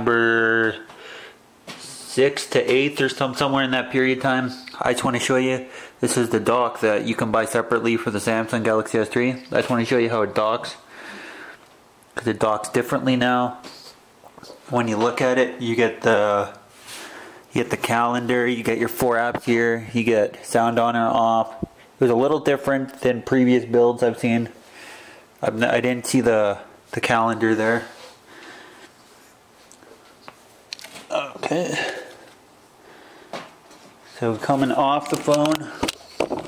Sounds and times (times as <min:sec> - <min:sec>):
Speech: 0:00.0 - 0:00.9, 0:01.8 - 0:10.9, 0:12.2 - 0:16.7, 0:17.5 - 0:24.6, 0:25.4 - 0:28.0, 0:31.1 - 0:32.2, 0:34.1 - 0:35.8.